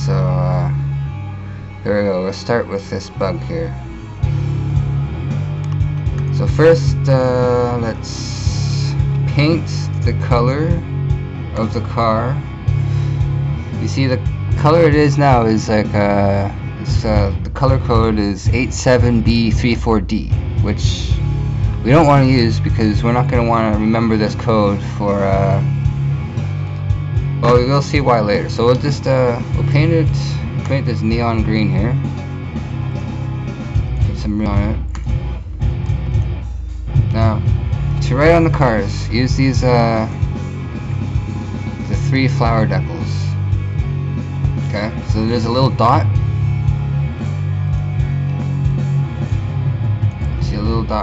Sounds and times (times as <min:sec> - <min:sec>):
Speech: 0:00.0 - 0:00.8, 0:01.8 - 0:03.8, 0:06.3 - 0:10.9, 0:11.6 - 0:12.4, 0:13.8 - 0:21.2, 0:21.8 - 0:25.7, 0:27.4 - 0:32.0, 0:34.0 - 0:34.9, 0:37.1 - 0:40.2, 0:41.8 - 0:43.4, 0:44.7 - 0:46.2, 0:50.4 - 0:51.0
Music: 0:00.0 - 0:51.0.